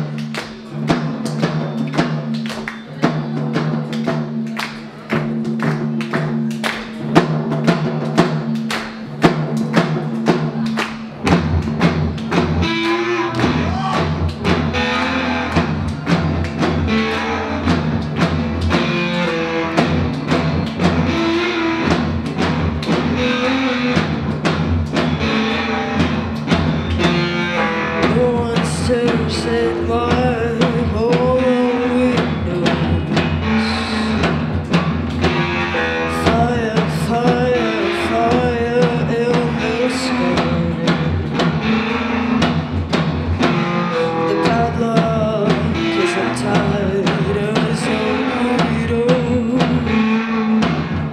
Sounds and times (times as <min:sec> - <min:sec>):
Music: 0:00.0 - 0:51.1.